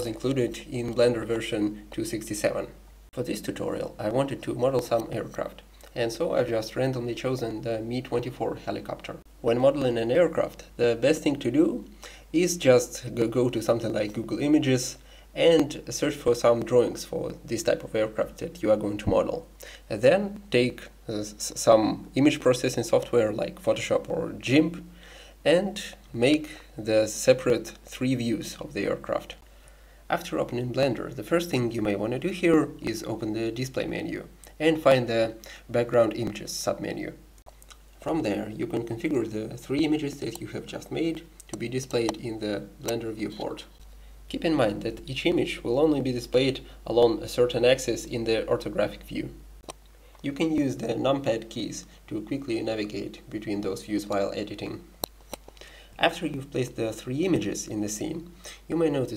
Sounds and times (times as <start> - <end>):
Speech: 0.0 - 29.4, 30.1 - 37.2, 38.0 - 49.4, 50.2 - 54.9, 56.0 - 59.1.